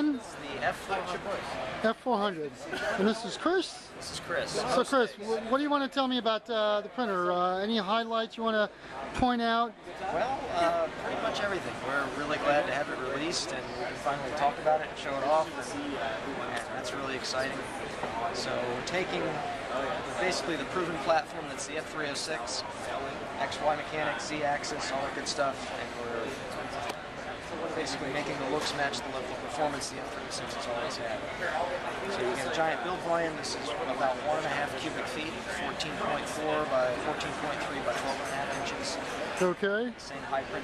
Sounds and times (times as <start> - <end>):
Speech: 0.0 - 40.6.